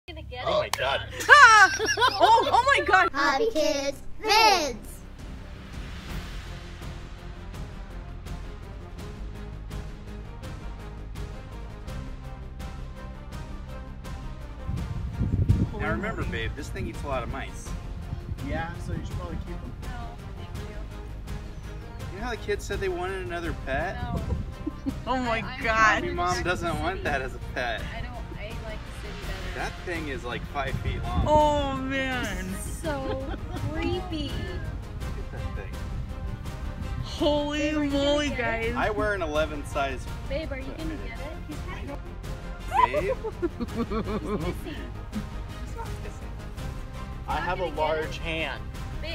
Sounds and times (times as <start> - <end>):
Music: 0.1 - 49.1.